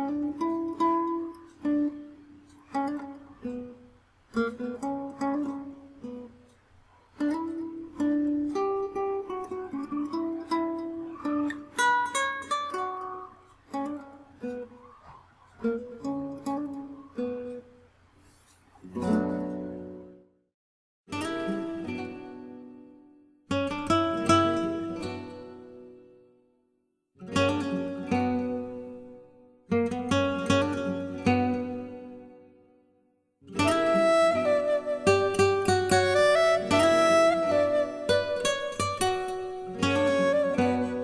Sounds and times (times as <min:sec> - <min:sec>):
Guitar: 0:00.0 - 0:20.4, 0:21.1 - 0:41.0.